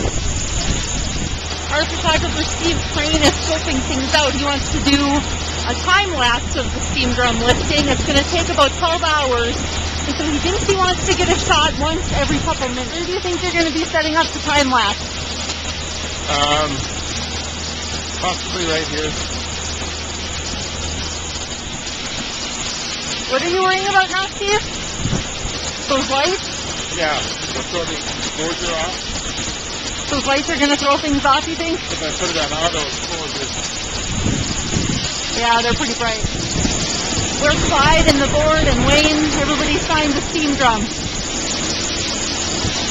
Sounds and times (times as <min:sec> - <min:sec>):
Speech: 0:01.7 - 0:15.0, 0:16.3 - 0:16.8, 0:23.3 - 0:24.6, 0:25.9 - 0:26.4, 0:27.0 - 0:29.0, 0:30.1 - 0:33.5, 0:35.3 - 0:36.3, 0:37.4 - 0:40.9.